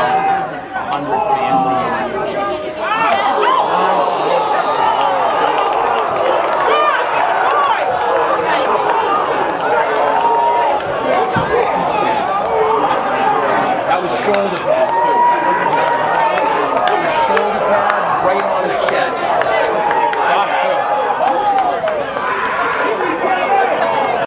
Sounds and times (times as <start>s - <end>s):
Speech: 0.0s - 24.2s.